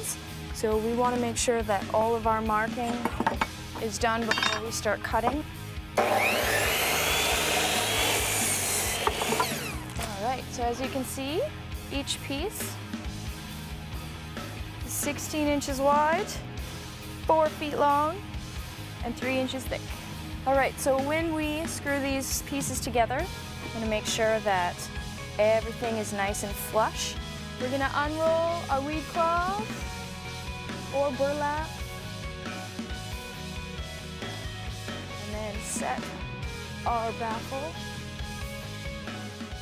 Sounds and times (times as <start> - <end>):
Speech: 0.0 - 3.0, 3.8 - 5.5, 10.0 - 12.8, 14.9 - 16.4, 17.3 - 18.2, 19.0 - 19.8, 20.4 - 29.8, 30.9 - 31.7, 35.2 - 36.2, 36.8 - 37.8
Music: 0.0 - 39.6.